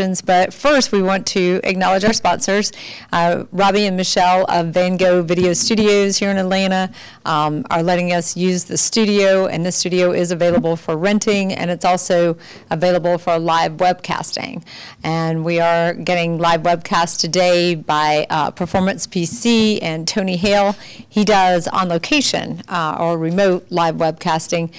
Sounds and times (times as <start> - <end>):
Speech: 0.0 - 24.7.